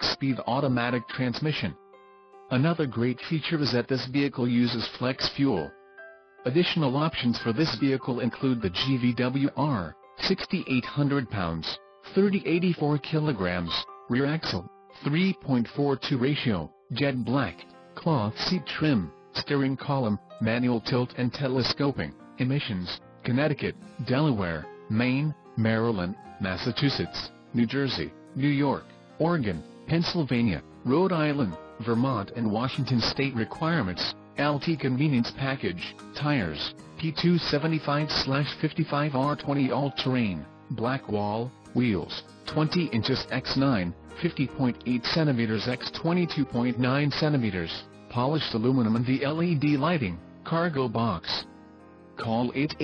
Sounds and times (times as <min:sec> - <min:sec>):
Speech: 0:00.0 - 0:01.8, 0:02.5 - 0:05.7, 0:06.5 - 0:51.5, 0:52.2 - 0:52.8
Music: 0:00.0 - 0:52.8.